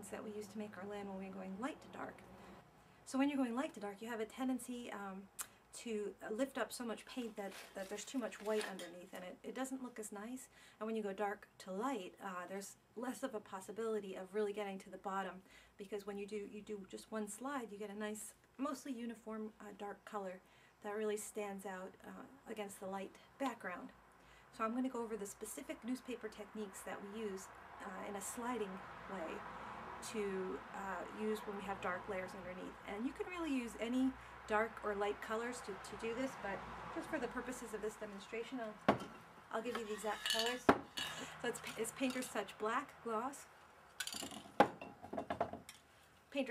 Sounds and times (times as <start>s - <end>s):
Speech: 0.0s - 2.2s, 3.1s - 29.4s, 30.0s - 38.8s, 39.5s - 40.7s, 41.4s - 43.5s.